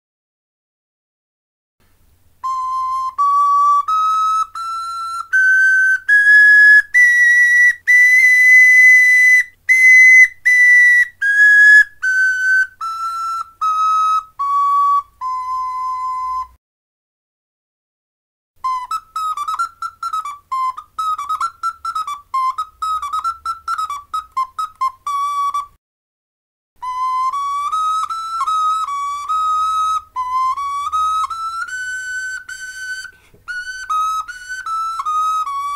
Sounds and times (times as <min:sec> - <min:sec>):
Whistle: 0:02.4 - 0:16.6, 0:18.6 - 0:25.8, 0:26.8 - 0:35.7.